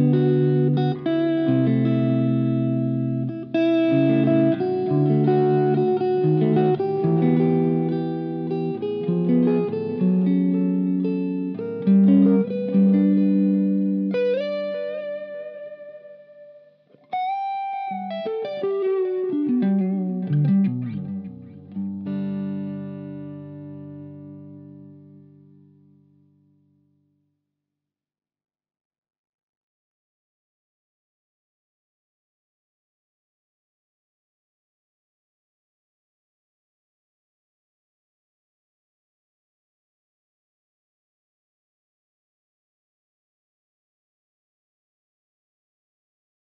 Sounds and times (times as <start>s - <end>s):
Music: 0.0s - 27.6s.